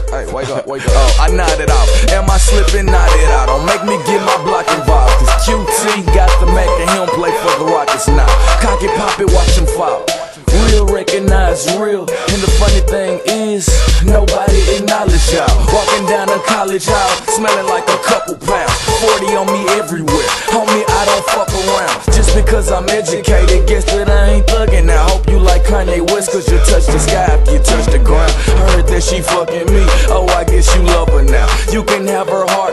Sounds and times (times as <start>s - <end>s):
Music: 0.0s - 32.7s.